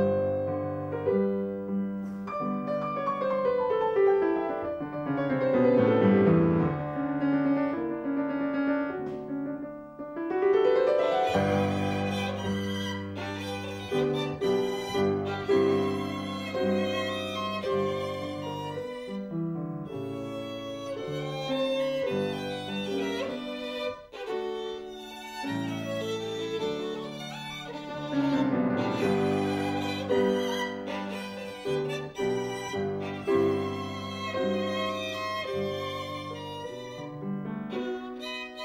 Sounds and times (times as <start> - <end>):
Violin, fiddle: 0.0 - 8.1, 10.3 - 38.6.